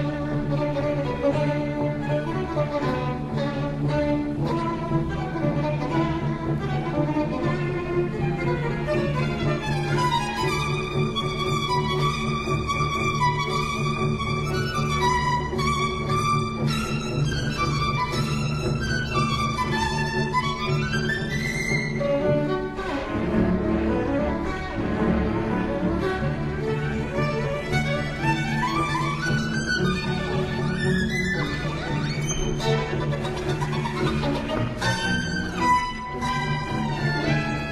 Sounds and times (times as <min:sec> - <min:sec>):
Violin, fiddle: 0:00.0 - 0:37.7.